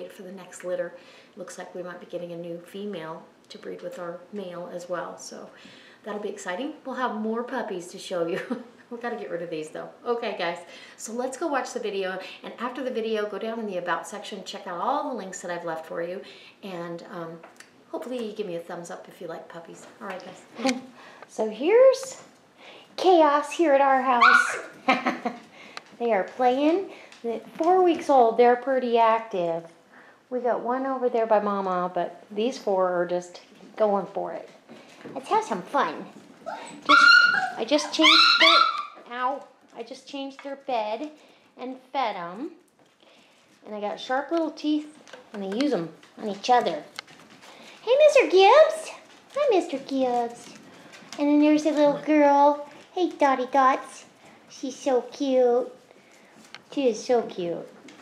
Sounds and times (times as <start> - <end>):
Speech: 0.0 - 22.3, 23.0 - 24.7, 26.0 - 29.7, 30.3 - 34.6, 35.2 - 36.2, 36.9 - 42.6, 43.6 - 47.0, 47.8 - 50.6, 51.2 - 55.8, 56.7 - 57.8
Inside, small room: 0.0 - 58.0
Dog: 24.2 - 24.7, 36.4 - 39.0.